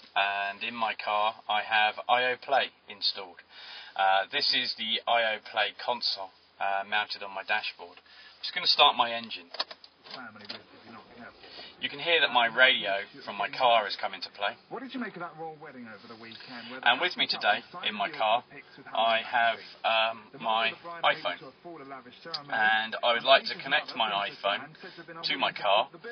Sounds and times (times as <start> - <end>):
Speech: 0.2 - 3.4, 4.0 - 26.1.